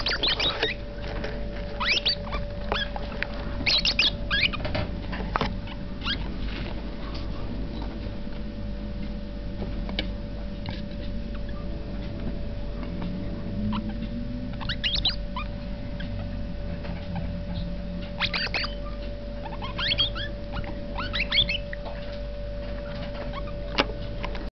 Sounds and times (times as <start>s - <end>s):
Domestic animals, pets: 0.0s - 8.1s, 10.6s - 24.5s.